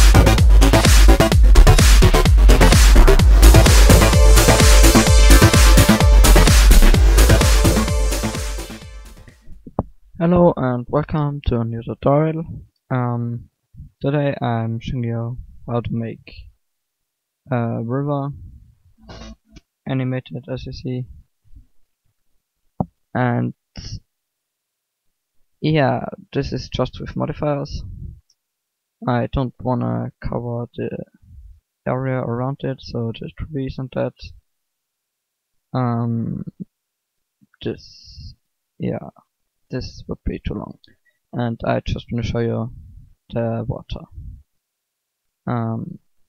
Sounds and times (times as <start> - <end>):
Speech: 10.2 - 16.5, 17.5 - 21.2, 23.1 - 24.1, 25.6 - 28.2, 29.0 - 31.2, 31.9 - 34.4, 35.8 - 36.6, 37.6 - 40.8, 41.4 - 44.4, 45.5 - 46.0.